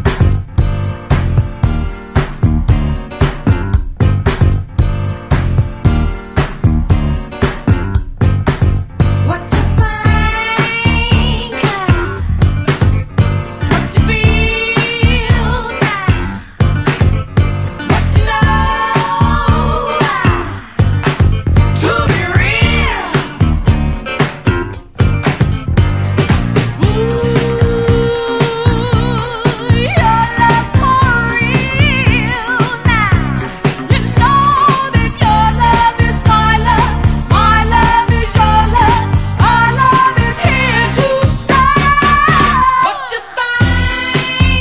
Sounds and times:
Funk: 0.0 - 42.8, 43.6 - 44.6.

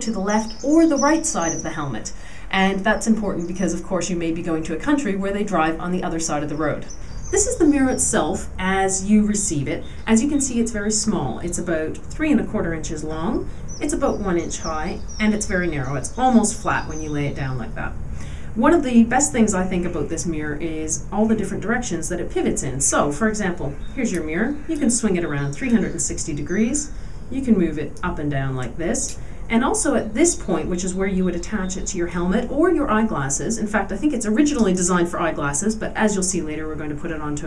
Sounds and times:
Speech: 0.0 - 18.0, 18.6 - 37.4.

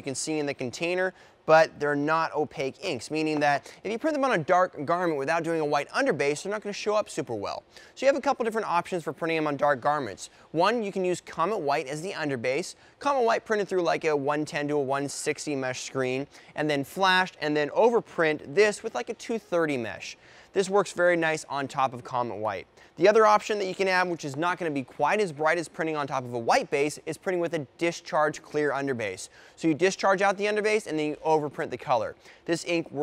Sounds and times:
Speech: 0.0 - 33.0.

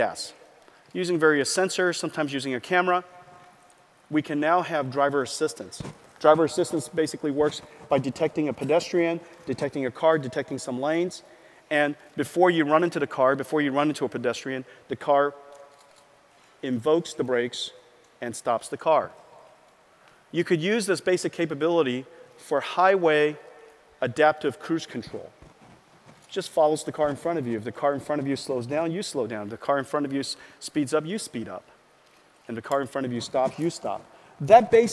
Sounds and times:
Speech: 0.0 - 0.4, 1.0 - 3.0, 4.1 - 15.4, 16.6 - 19.2, 20.4 - 23.4, 24.0 - 25.3, 26.3 - 31.7, 32.5 - 34.9.

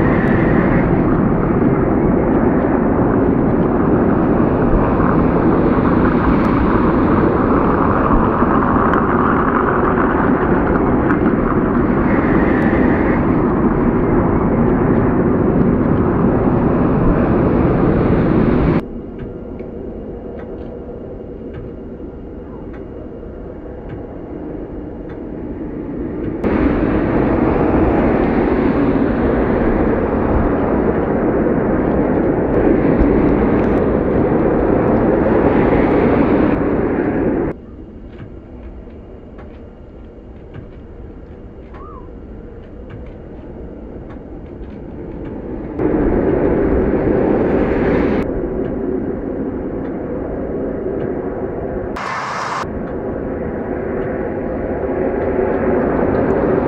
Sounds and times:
Vehicle: 0.0 - 23.2, 51.0 - 56.6.

